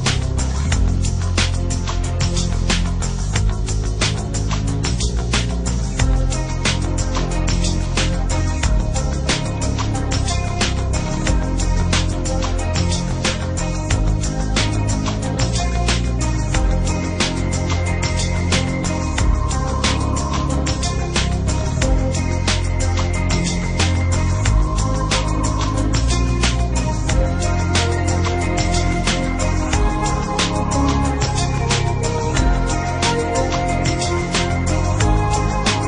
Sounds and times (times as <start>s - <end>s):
Music: 0.0s - 35.8s.